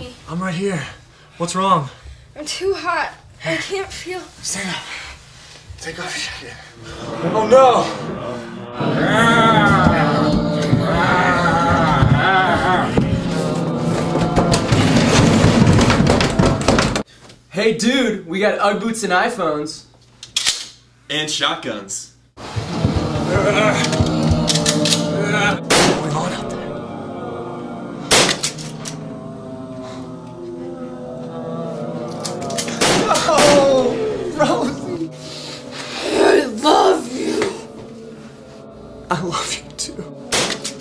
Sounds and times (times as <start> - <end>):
Inside, large room or hall: 6.7 - 17.0, 22.4 - 39.0, 40.3 - 40.8.